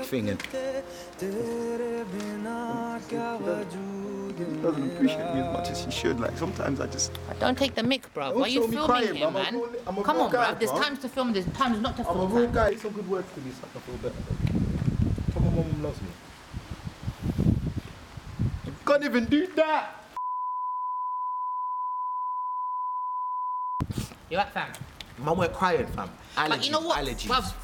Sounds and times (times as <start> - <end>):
Outside, rural or natural: 0.0 - 21.8, 23.4 - 27.6.